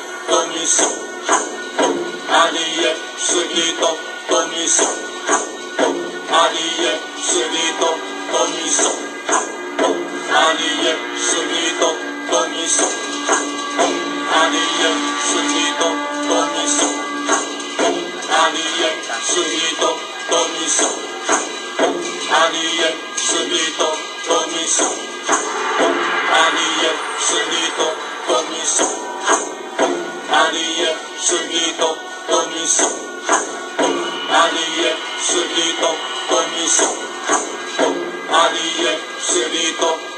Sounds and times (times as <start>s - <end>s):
Mantra: 0.0s - 40.1s.